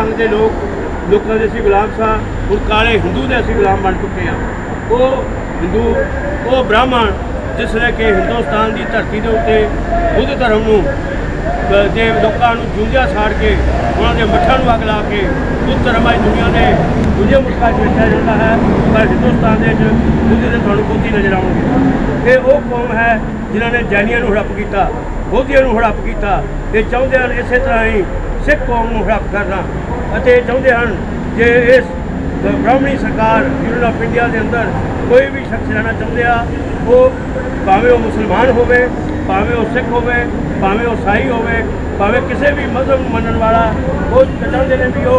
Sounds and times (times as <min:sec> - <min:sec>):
Male speech, man speaking: 0:00.0 - 0:45.1
Narration, monologue: 0:00.0 - 0:45.1.